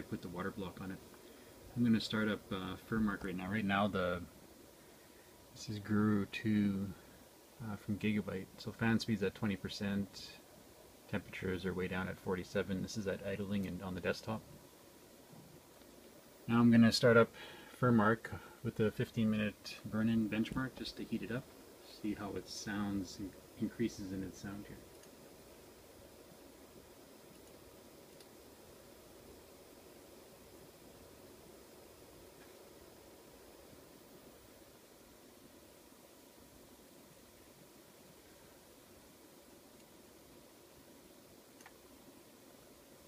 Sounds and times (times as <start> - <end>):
Speech: 0.0 - 1.0, 1.7 - 4.3, 5.6 - 7.0, 7.6 - 10.5, 11.1 - 14.5, 16.5 - 24.8.